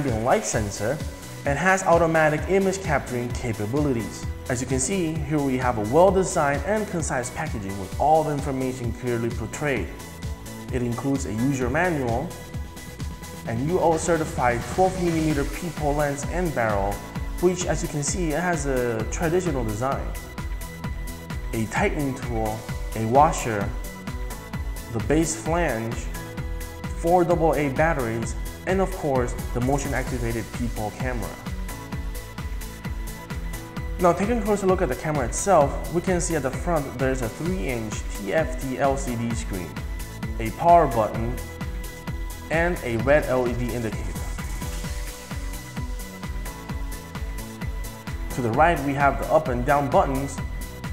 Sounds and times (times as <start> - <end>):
Speech: 0.0 - 10.0, 10.7 - 12.3, 13.5 - 20.2, 21.5 - 23.8, 24.9 - 26.1, 27.0 - 31.5, 34.0 - 39.8, 40.4 - 41.4, 42.5 - 44.4, 48.3 - 50.4
Music: 0.0 - 50.9.